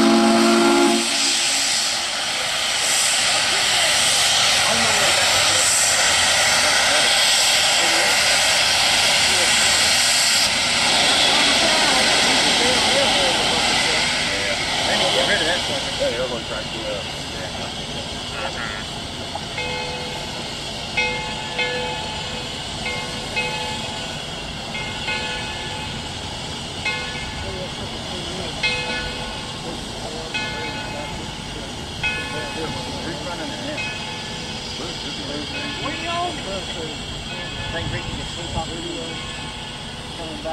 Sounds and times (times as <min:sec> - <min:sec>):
Speech: 0:02.2 - 0:08.3, 0:09.2 - 0:10.0, 0:11.3 - 0:18.9, 0:27.4 - 0:29.0, 0:29.6 - 0:33.9, 0:34.8 - 0:39.2, 0:40.1 - 0:40.5.